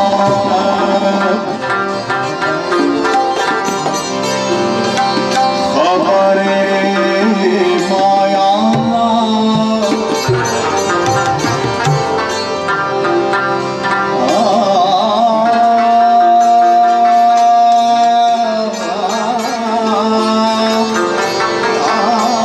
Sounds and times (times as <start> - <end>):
Traditional music: 0.0 - 22.4.